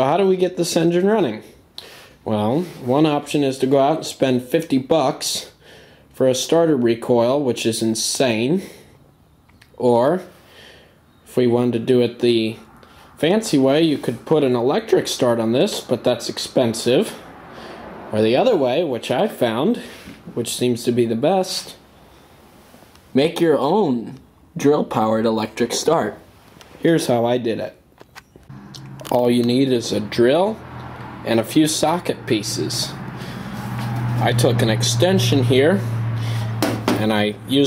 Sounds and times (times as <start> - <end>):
Speech: 0.0 - 1.6, 2.2 - 5.6, 6.2 - 8.8, 9.8 - 10.3, 11.3 - 17.2, 18.1 - 21.8, 23.1 - 26.2, 26.8 - 27.8, 29.1 - 30.6, 31.3 - 33.0, 34.2 - 35.9, 36.9 - 37.6.